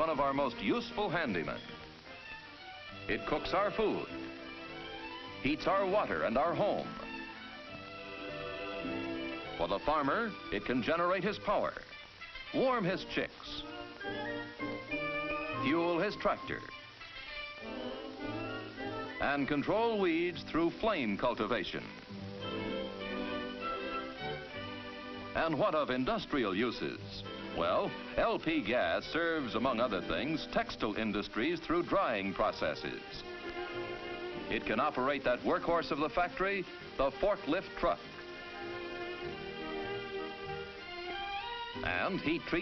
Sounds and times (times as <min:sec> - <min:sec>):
Speech: 0:00.0 - 0:01.6, 0:03.1 - 0:04.1, 0:05.4 - 0:06.9, 0:09.6 - 0:11.8, 0:12.5 - 0:13.7, 0:15.6 - 0:16.7, 0:19.2 - 0:22.0, 0:25.4 - 0:33.2, 0:34.5 - 0:38.0, 0:41.8 - 0:42.6.